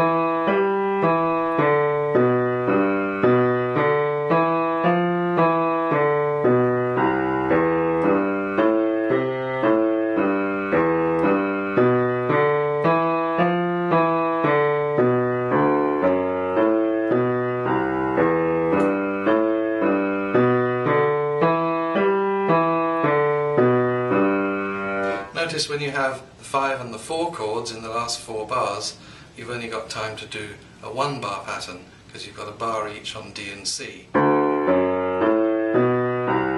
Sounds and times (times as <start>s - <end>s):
Piano: 0.0s - 28.8s, 32.6s - 36.5s.